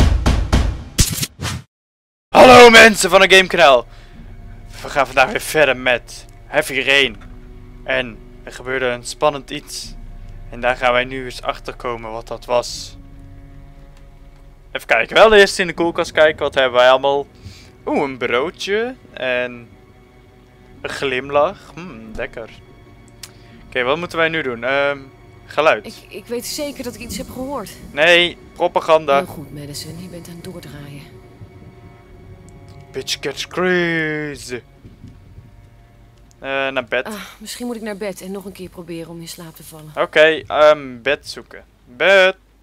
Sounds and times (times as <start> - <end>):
Music: 0.0 - 1.0, 2.4 - 42.6
Speech: 2.4 - 3.8, 4.8 - 7.2, 7.9 - 10.0, 10.6 - 13.0, 14.8 - 17.3, 17.9 - 19.7, 20.8 - 22.6, 23.7 - 31.1, 32.9 - 34.6, 36.4 - 42.4.